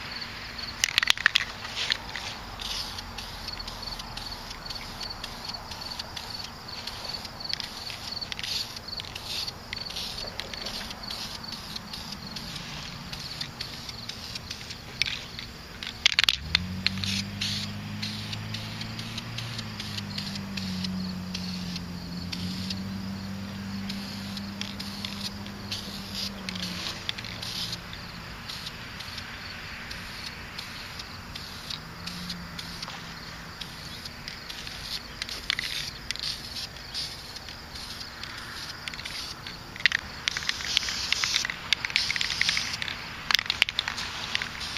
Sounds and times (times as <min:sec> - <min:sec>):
Insect: 0:00.0 - 0:44.7
Outside, rural or natural: 0:00.0 - 0:44.7.